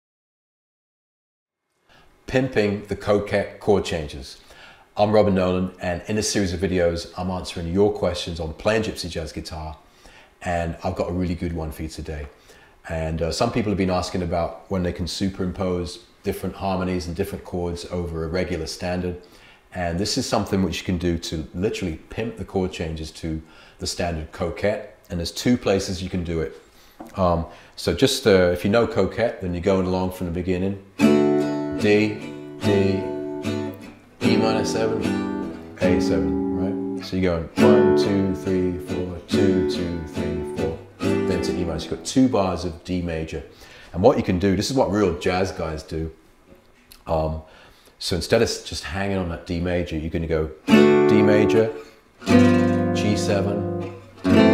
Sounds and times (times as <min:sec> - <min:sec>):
Speech: 0:02.3 - 0:04.4, 0:05.0 - 0:09.8, 0:10.4 - 0:30.9, 0:31.8 - 0:33.1, 0:35.8 - 0:46.2, 0:47.0 - 0:51.8, 0:53.0 - 0:53.7
Acoustic guitar: 0:30.9 - 0:42.6, 0:50.7 - 0:54.5
Strum: 0:31.0 - 0:42.5, 0:50.7 - 0:54.5.